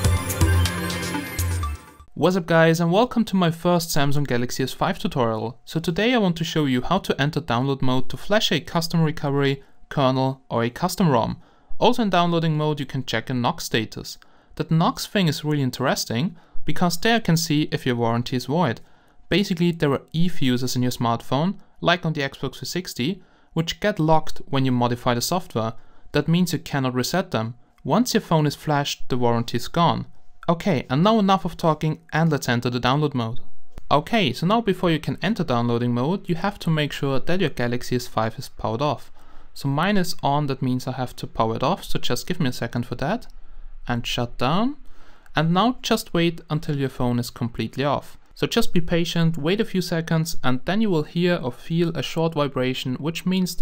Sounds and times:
Speech: 2.2s - 43.3s, 43.9s - 53.6s.

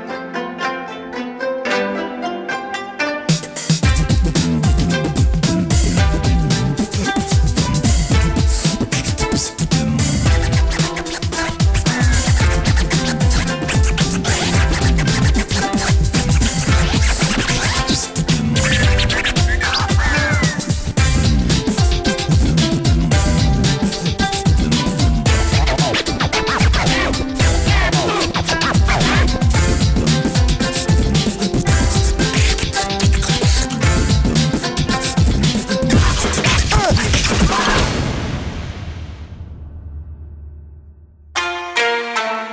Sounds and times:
Beatboxing: 3.3s - 38.0s.

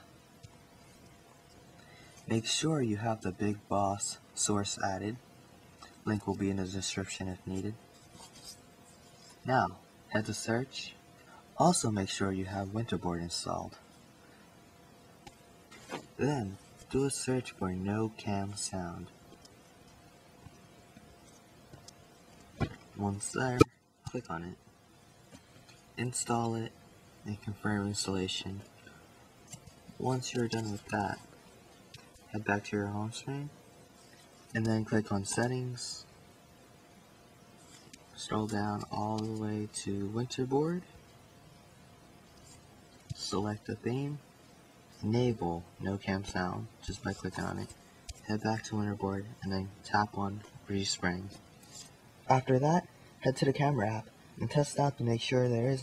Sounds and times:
Speech: 2.3s - 5.2s, 6.0s - 7.8s, 9.4s - 11.0s, 11.6s - 13.8s, 16.2s - 19.1s, 23.0s - 24.6s, 26.0s - 28.7s, 30.0s - 31.3s, 32.3s - 33.6s, 34.5s - 36.1s, 38.2s - 40.9s, 43.1s - 44.2s, 45.0s - 51.4s, 52.2s - 55.8s.

